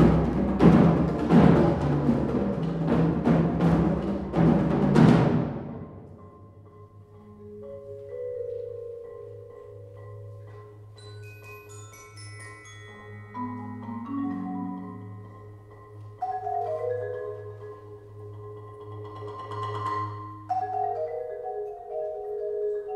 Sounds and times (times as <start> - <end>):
Marimba, xylophone: 0.0 - 22.9
Orchestra: 0.0 - 22.9
Vibraphone: 0.0 - 22.9.